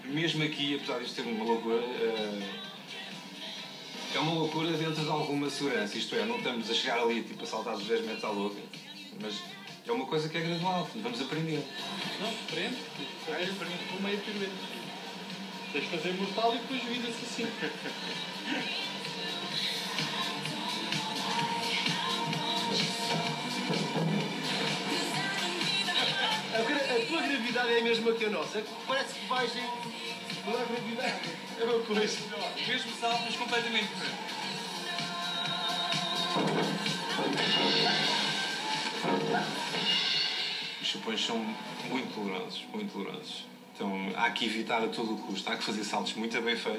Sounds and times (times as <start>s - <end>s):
Music: 0.0s - 46.7s.